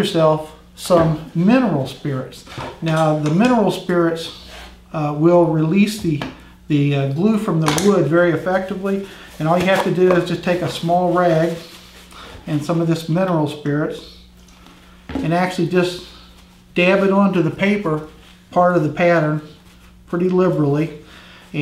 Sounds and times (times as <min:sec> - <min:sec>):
Speech: 0:00.0 - 0:11.7, 0:12.5 - 0:14.2, 0:15.2 - 0:16.2, 0:16.8 - 0:21.0.